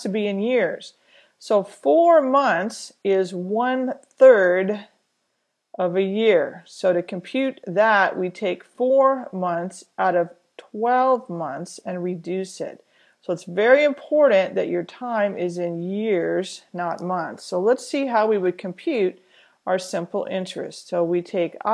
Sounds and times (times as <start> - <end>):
Narration, monologue: 0.0 - 21.7.